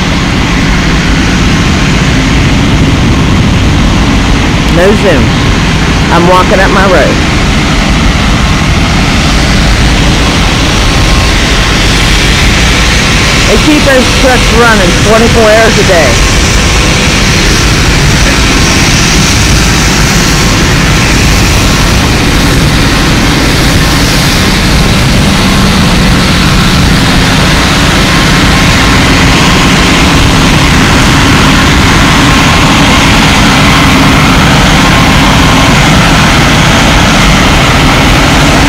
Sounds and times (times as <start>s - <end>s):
Speech: 4.7s - 5.3s, 6.1s - 7.2s, 13.5s - 16.2s.